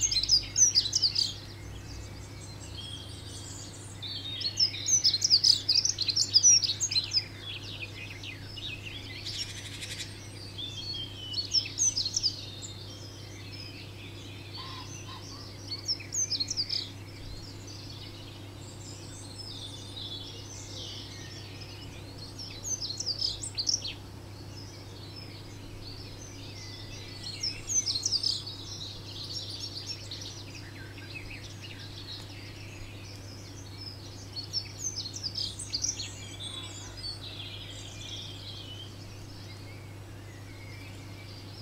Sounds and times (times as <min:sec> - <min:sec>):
Chirp, tweet: 0:00.0 - 0:41.6.